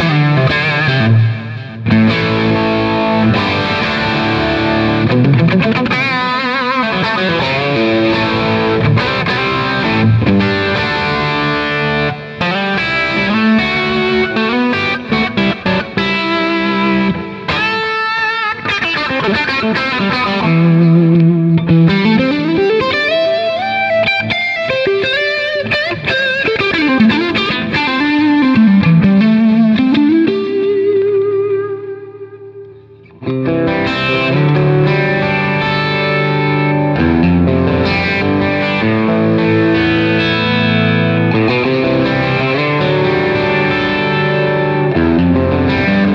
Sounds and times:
Music: 0.0 - 46.1.

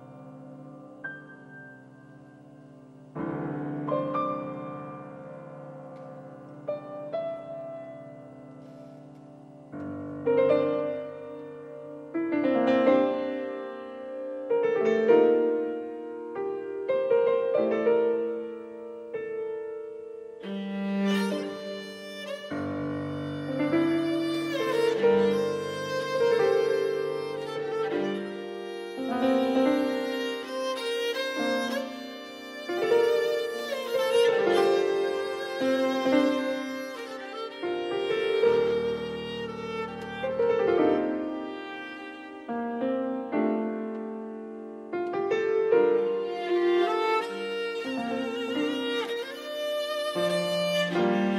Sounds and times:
Piano: 0.0 - 51.3.

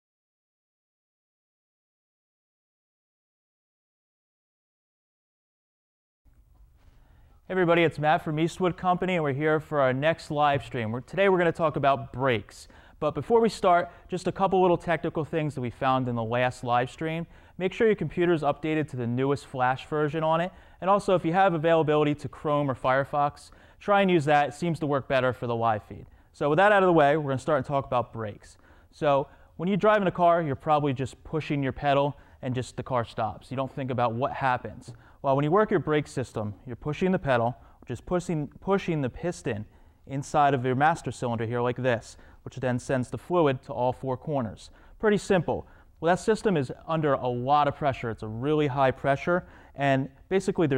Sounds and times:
Speech: 7.5 - 50.7.

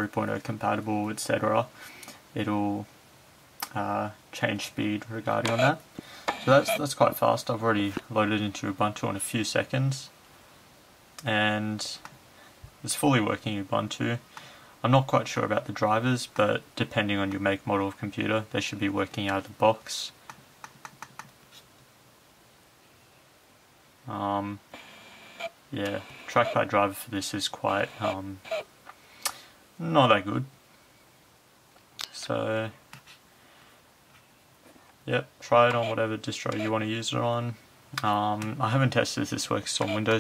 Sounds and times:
Speech: 0.0 - 1.7, 2.4 - 2.9, 3.6 - 5.8, 6.5 - 10.2, 11.2 - 12.1, 12.8 - 14.2, 14.8 - 20.2, 24.1 - 24.6, 25.7 - 28.4, 29.8 - 30.6, 32.0 - 32.8, 35.1 - 40.2.

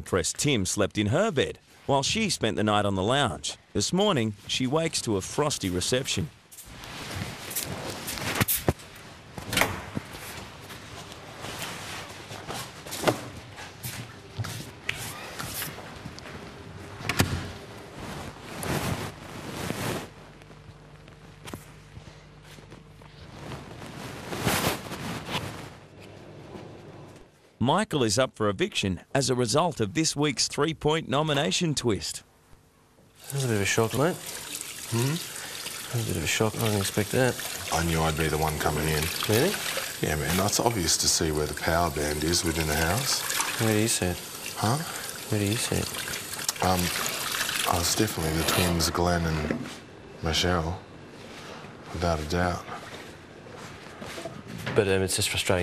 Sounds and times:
Speech: 0.0 - 6.4, 27.6 - 32.3, 33.3 - 34.2, 34.9 - 35.3, 35.9 - 45.9, 46.5 - 47.0, 47.7 - 50.8, 51.9 - 52.8, 54.7 - 55.6.

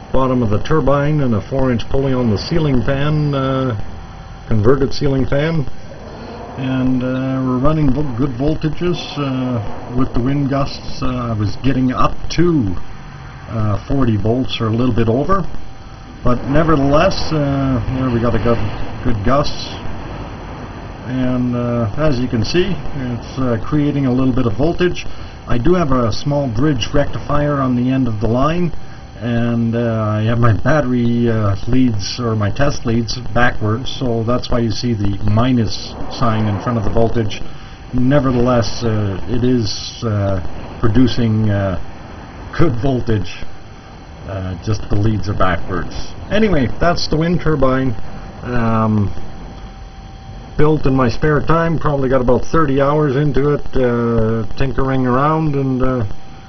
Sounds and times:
Speech: 0.0 - 3.8, 4.5 - 5.7, 6.6 - 12.8, 13.5 - 15.6, 16.2 - 19.9, 21.1 - 41.9, 42.5 - 43.5, 44.2 - 49.2, 50.6 - 56.2.

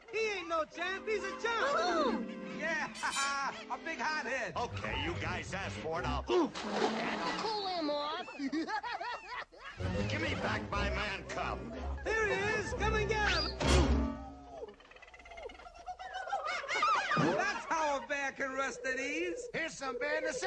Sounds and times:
Speech: 0.0 - 8.3, 9.9 - 13.6, 17.2 - 20.4
Music: 0.2 - 6.3, 9.8 - 14.4.

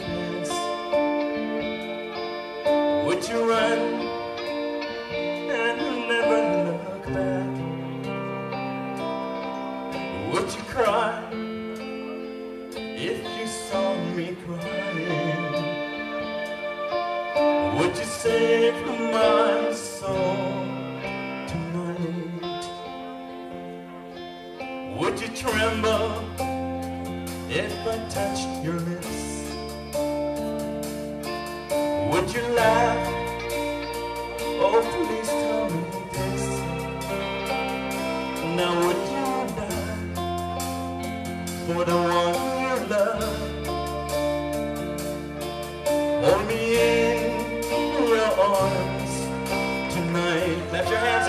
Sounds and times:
Male singing: 0.0 - 1.2, 2.9 - 4.5, 5.3 - 7.8, 10.1 - 11.4, 13.0 - 16.0, 17.6 - 22.9, 24.9 - 26.6, 27.5 - 29.6, 32.0 - 33.5, 34.5 - 37.2, 38.4 - 40.4, 41.6 - 43.8, 46.2 - 51.2
Music: 0.0 - 51.2.

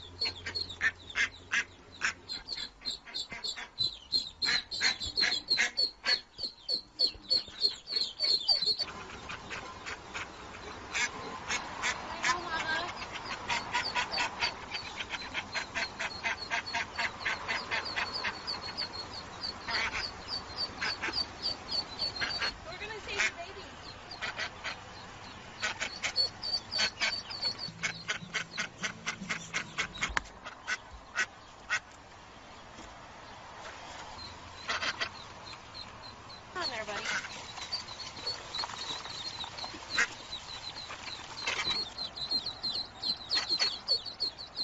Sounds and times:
Quack: 0.2 - 6.3, 10.9 - 19.0, 19.6 - 20.2, 20.8 - 24.8, 25.6 - 31.9, 34.6 - 35.2, 36.6 - 37.3
Speech: 12.1 - 13.0, 22.6 - 23.7, 36.6 - 37.2.

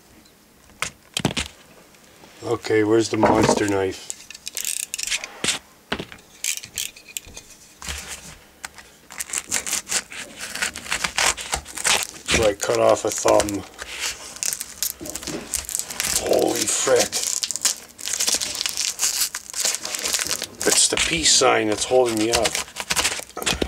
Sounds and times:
Inside, small room: 0.0 - 23.6
Speech: 2.4 - 4.1, 12.3 - 13.6, 16.2 - 17.2, 20.6 - 22.6.

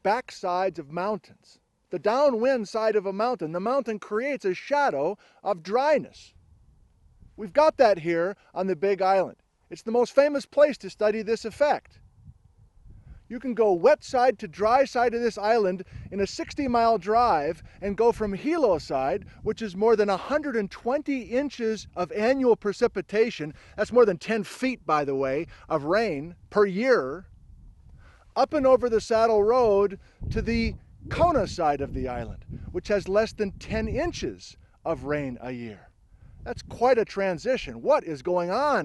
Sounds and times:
Speech: 0.0 - 6.3, 7.4 - 11.9, 13.3 - 27.2, 28.4 - 35.9, 36.5 - 38.8.

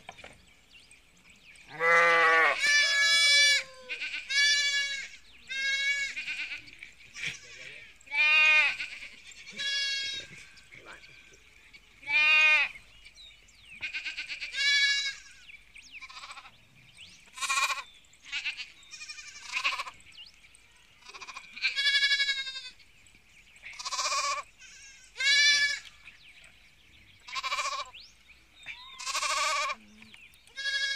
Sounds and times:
Chirp, tweet: 0.0 - 1.8, 4.8 - 8.1, 8.8 - 12.1, 12.7 - 14.4, 15.0 - 30.9.

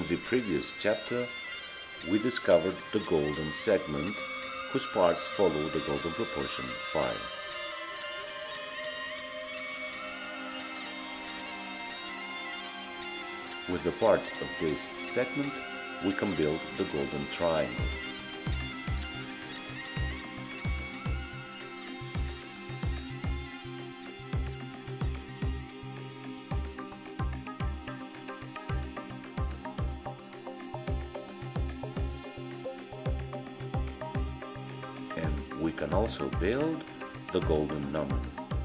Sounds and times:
Speech: 0.0 - 1.4, 2.0 - 4.2, 4.8 - 7.3, 13.7 - 17.9, 35.2 - 38.3
Music: 0.0 - 38.6.

